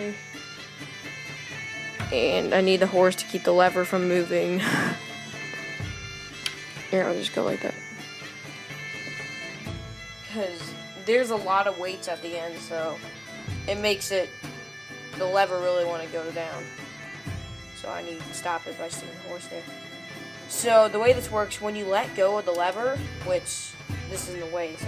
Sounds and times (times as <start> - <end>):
Bagpipes: 0.0 - 24.8.